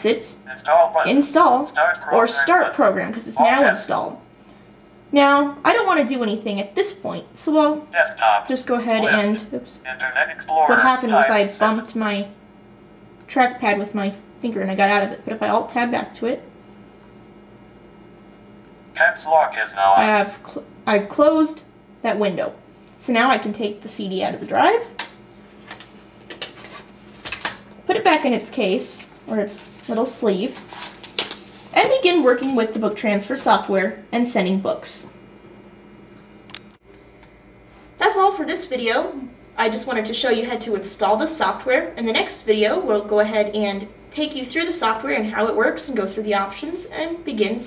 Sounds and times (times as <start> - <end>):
Speech: 0.0 - 4.2, 5.2 - 12.3, 13.3 - 16.4, 19.0 - 24.9, 27.9 - 30.6, 31.8 - 35.1, 38.0 - 47.6.